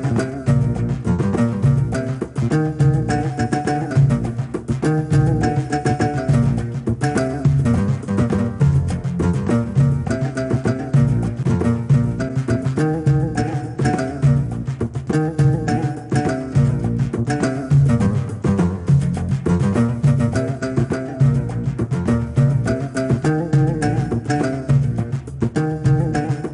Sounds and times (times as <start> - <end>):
Music: 0.0 - 26.5.